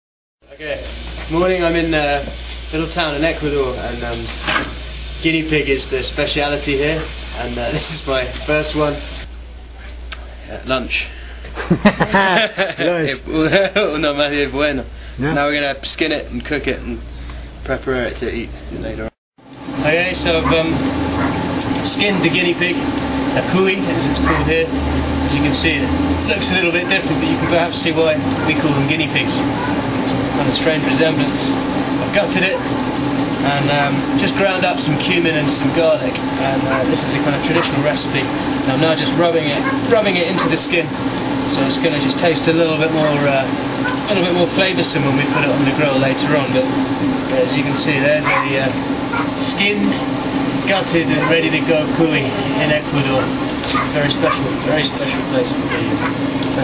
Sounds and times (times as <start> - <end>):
Speech: 0.5 - 4.4, 5.2 - 9.1, 10.2 - 11.1, 12.8 - 17.0, 17.6 - 19.1, 19.8 - 20.9, 21.8 - 22.8, 23.4 - 24.7, 25.3 - 29.5, 30.4 - 32.6, 33.4 - 40.9, 41.5 - 48.8, 49.4 - 50.0, 50.6 - 56.0.